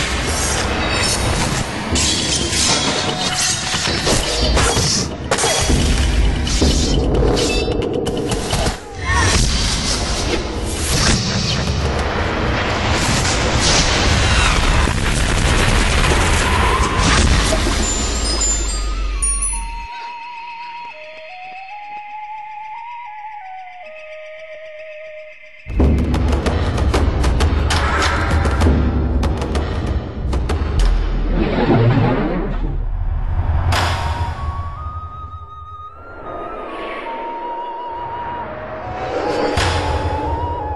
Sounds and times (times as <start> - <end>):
Flute: 17.9 - 25.4, 34.0 - 40.7.